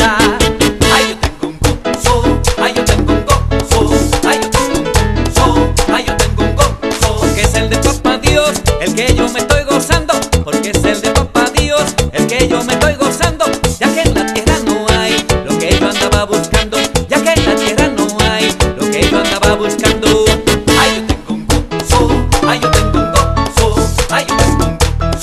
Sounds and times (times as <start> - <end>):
Music: 0.0 - 25.2.